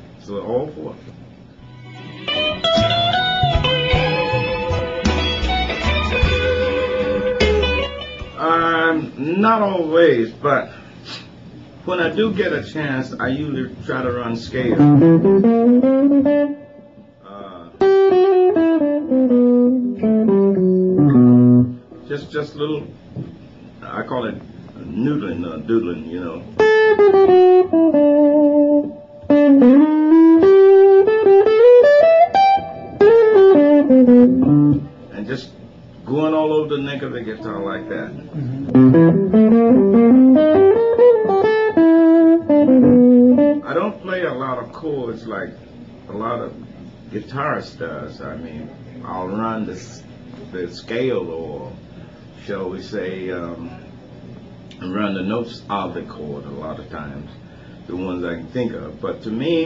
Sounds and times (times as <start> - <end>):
Speech: 0.2 - 1.1, 8.4 - 10.8, 11.8 - 15.0, 17.2 - 17.8, 22.0 - 23.0, 23.8 - 26.6, 35.1 - 38.6, 43.6 - 51.8, 52.4 - 53.9, 54.8 - 59.6
Guitar: 1.0 - 9.7, 13.3 - 44.8.